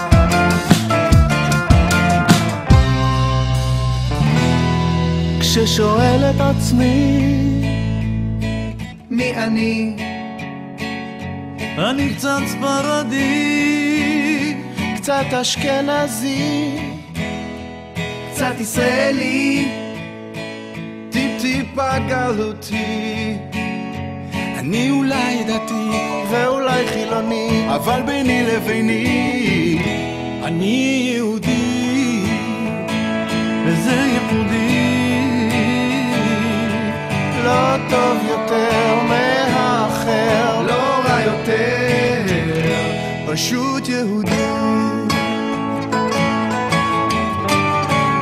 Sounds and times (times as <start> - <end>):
Music: 0.0 - 48.2.